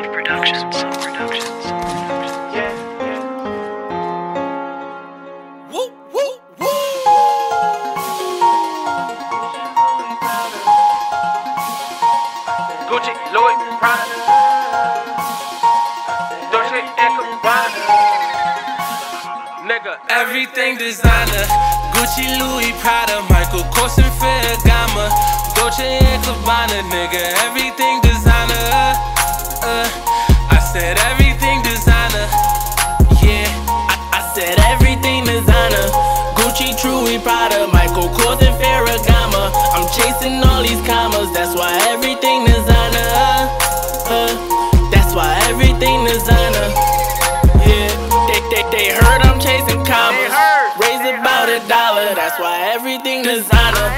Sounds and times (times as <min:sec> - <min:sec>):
Pop music: 0:00.0 - 0:53.9.